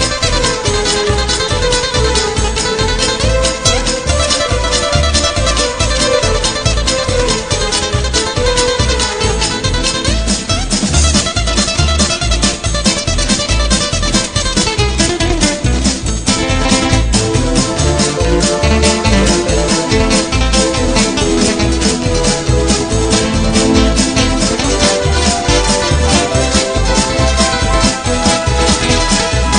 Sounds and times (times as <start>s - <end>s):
Music: 0.0s - 29.5s.